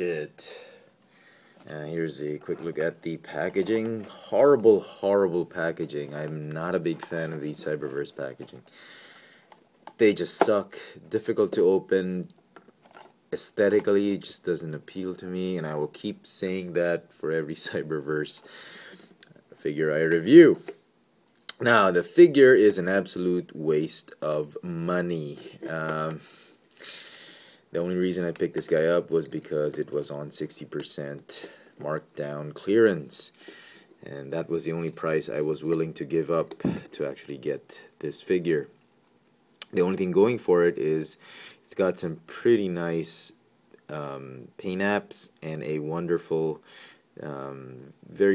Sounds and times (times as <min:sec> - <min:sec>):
Speech: 0:00.0 - 0:00.6, 0:01.7 - 0:08.6, 0:10.0 - 0:12.4, 0:13.3 - 0:18.4, 0:19.6 - 0:20.8, 0:21.5 - 0:26.2, 0:27.7 - 0:33.4, 0:34.0 - 0:38.8, 0:39.6 - 0:46.6, 0:47.2 - 0:48.3.